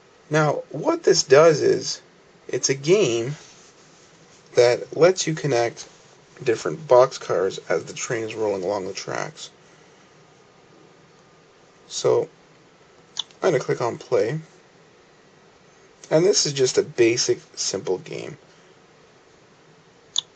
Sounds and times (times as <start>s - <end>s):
Speech: 0.3s - 3.5s, 4.6s - 9.6s, 11.9s - 12.3s, 13.2s - 14.5s, 16.0s - 18.4s.